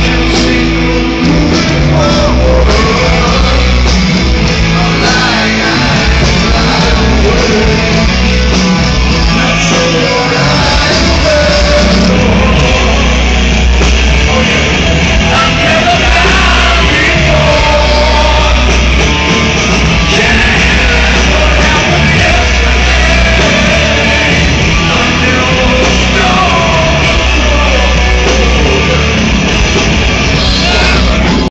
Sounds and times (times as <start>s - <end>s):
Music: 0.0s - 31.5s.